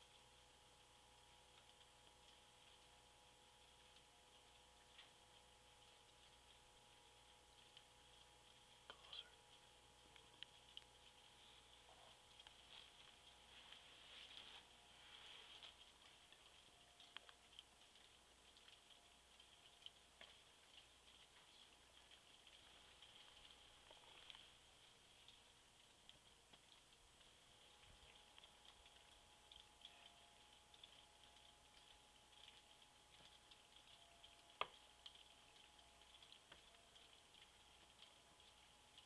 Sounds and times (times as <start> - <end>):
Speech: 8.9 - 9.4.